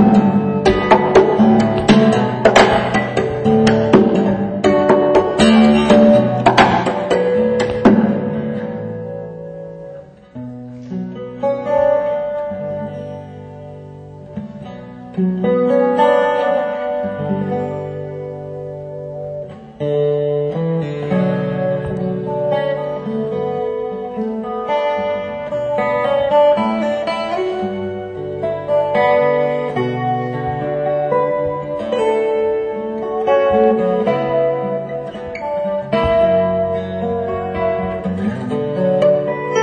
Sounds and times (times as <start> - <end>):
Acoustic guitar: 0.0 - 39.6
Electric guitar: 0.0 - 39.6
Strum: 0.0 - 39.6.